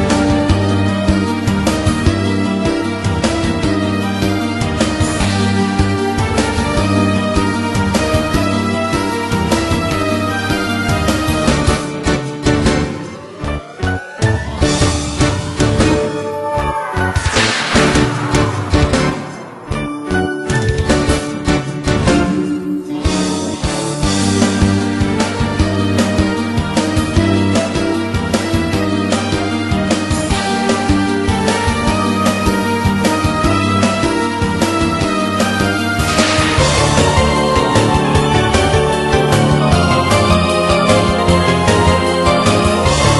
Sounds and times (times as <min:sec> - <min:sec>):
Music: 0:00.0 - 0:43.1.